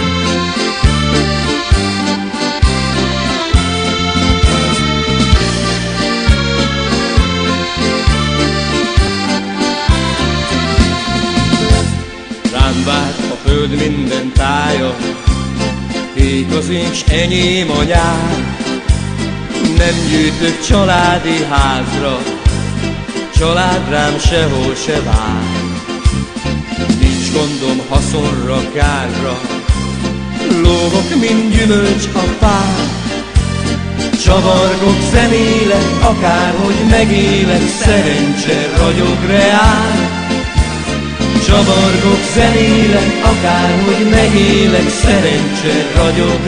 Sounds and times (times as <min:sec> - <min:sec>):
Music: 0:00.0 - 0:46.4.